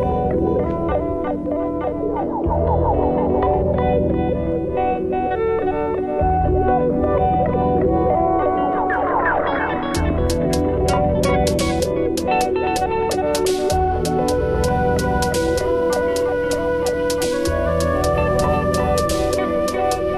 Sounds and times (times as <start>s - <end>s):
Music: 0.0s - 20.1s.